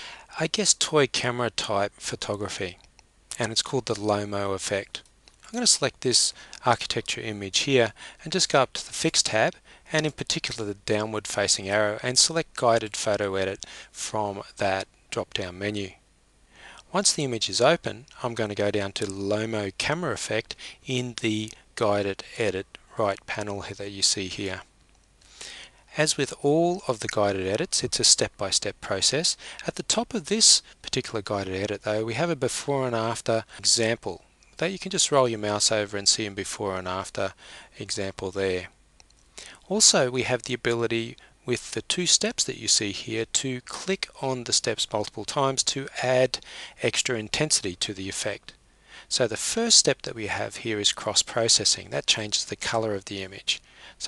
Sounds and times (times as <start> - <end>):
Speech: 0.3 - 16.0, 16.9 - 24.7, 25.9 - 38.7, 39.6 - 54.0.